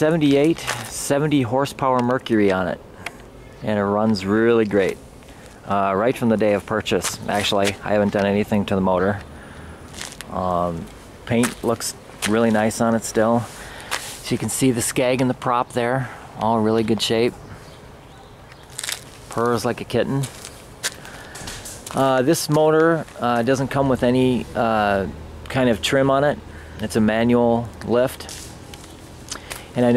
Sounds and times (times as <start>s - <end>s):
Speech: 0.0s - 2.8s, 3.6s - 5.0s, 5.7s - 9.2s, 10.3s - 13.5s, 14.2s - 17.4s, 19.3s - 20.4s, 21.9s - 28.3s, 29.8s - 29.9s.